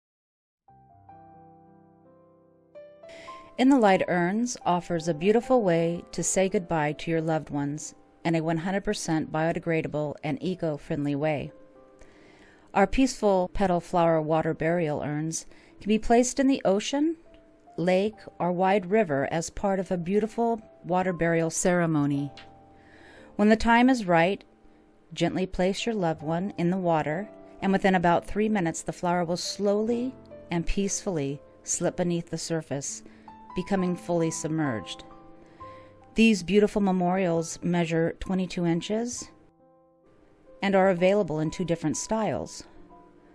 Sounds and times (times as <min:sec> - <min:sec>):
Music: 0:00.7 - 0:43.3
Speech: 0:03.6 - 0:11.5, 0:12.8 - 0:17.2, 0:17.8 - 0:22.4, 0:23.4 - 0:24.4, 0:25.2 - 0:33.0, 0:33.6 - 0:35.0, 0:36.2 - 0:39.3, 0:40.6 - 0:42.7.